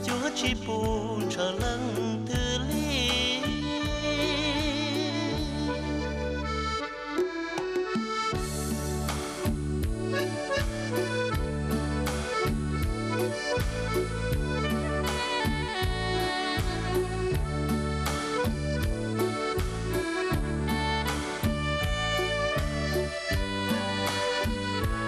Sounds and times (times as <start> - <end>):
Accordion: 0.0 - 25.0.